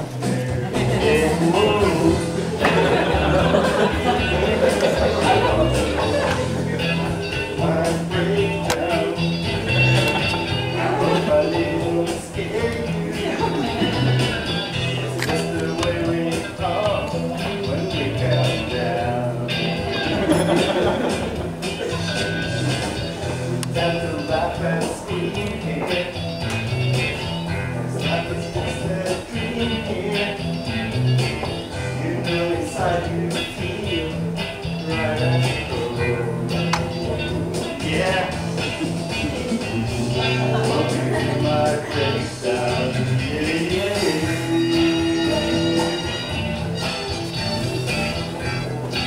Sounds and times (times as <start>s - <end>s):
Singing: 0.0s - 20.6s, 21.7s - 26.7s, 27.8s - 30.9s, 31.9s - 46.3s
Music of Latin America: 0.0s - 49.0s.